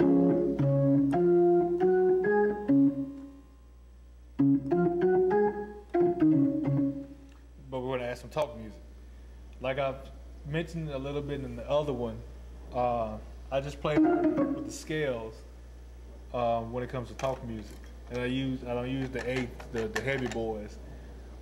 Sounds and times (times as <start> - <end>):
Music: 0.0 - 3.5, 4.4 - 7.4, 13.9 - 14.9
Speech: 7.6 - 8.9, 9.6 - 15.5, 16.3 - 20.8.